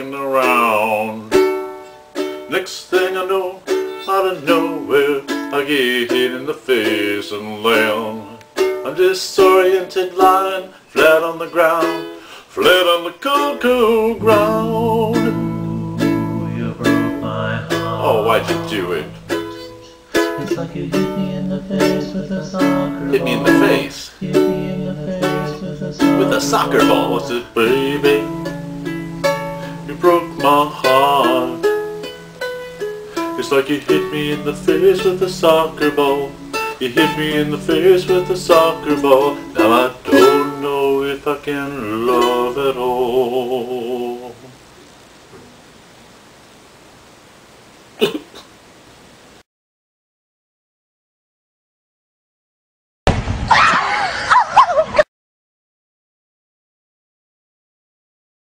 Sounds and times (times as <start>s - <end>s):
Cough: 48.0s - 48.5s.